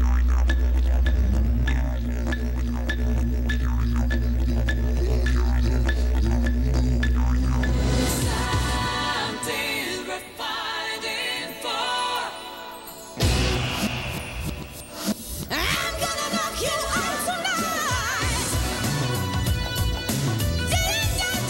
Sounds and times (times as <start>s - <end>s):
Music: 0.0s - 21.4s.